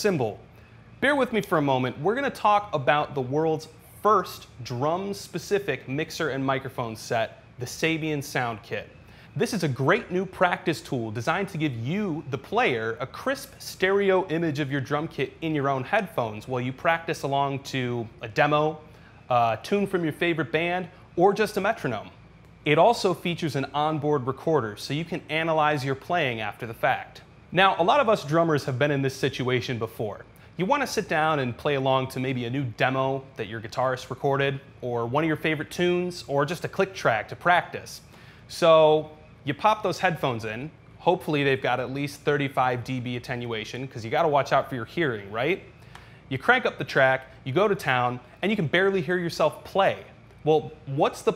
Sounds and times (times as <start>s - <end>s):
Speech: 0.0s - 45.7s, 46.3s - 51.3s.